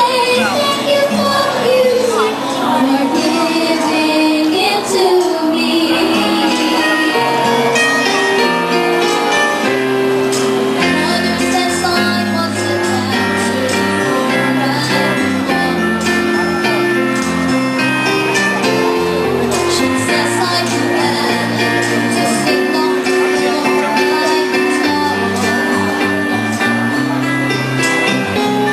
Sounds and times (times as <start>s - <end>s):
Speech: 0.0s - 7.8s, 10.8s - 17.5s, 18.3s - 28.3s
Music: 0.0s - 28.7s.